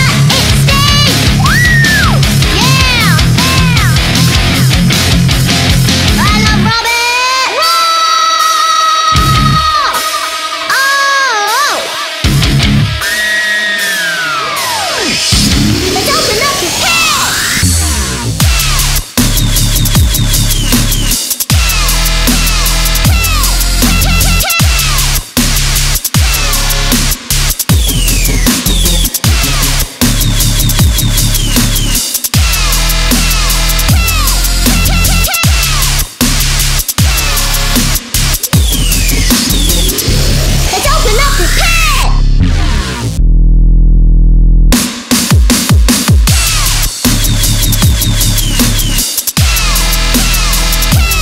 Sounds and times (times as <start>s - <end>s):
Dubstep: 0.0s - 7.3s, 8.3s - 43.2s, 44.8s - 51.2s.